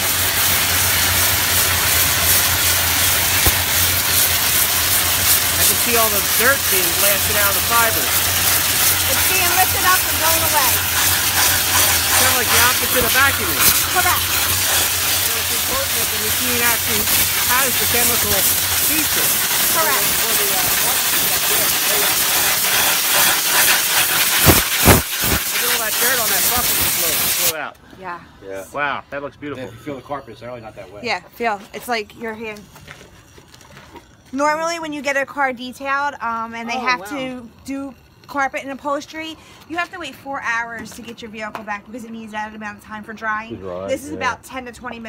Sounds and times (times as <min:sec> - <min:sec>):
Hiss: 0:00.0 - 0:27.6.